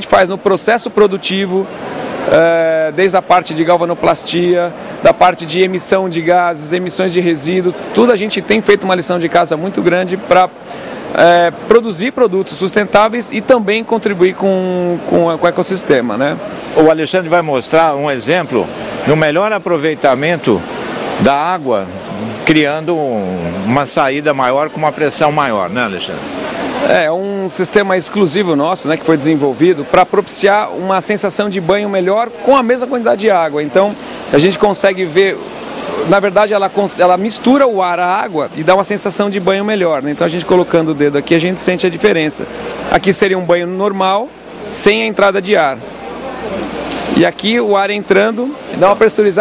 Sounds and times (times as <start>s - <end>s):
Speech: 0.0s - 1.7s, 2.3s - 10.6s, 11.2s - 35.4s, 36.0s - 49.4s.